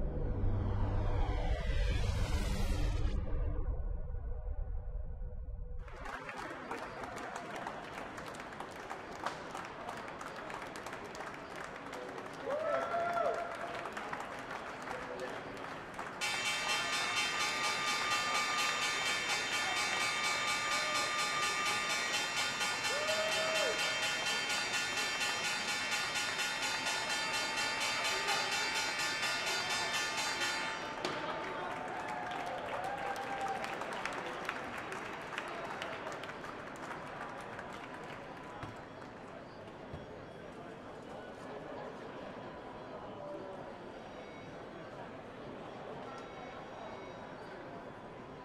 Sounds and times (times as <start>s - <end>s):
Speech: 9.6s - 15.7s, 27.4s - 32.7s, 37.1s - 48.4s.